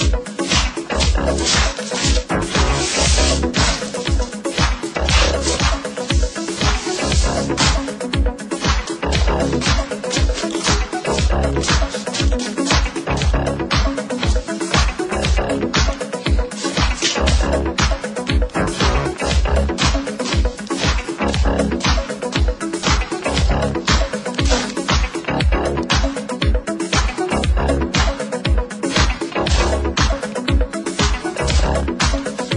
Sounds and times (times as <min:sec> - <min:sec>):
Music: 0:00.0 - 0:32.5.